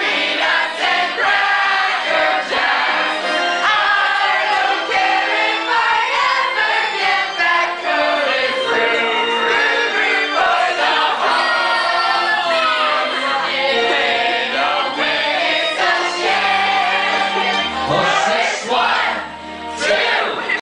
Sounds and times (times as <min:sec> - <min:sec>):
Choir: 0:00.0 - 0:20.6.